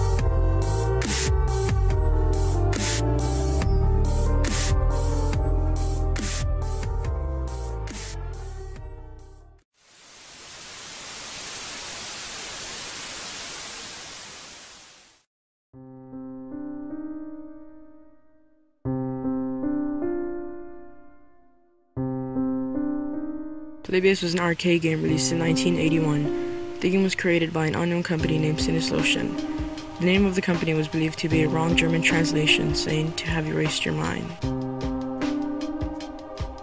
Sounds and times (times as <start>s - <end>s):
Piano: 0.0s - 9.6s, 15.8s - 24.1s, 25.0s - 36.6s.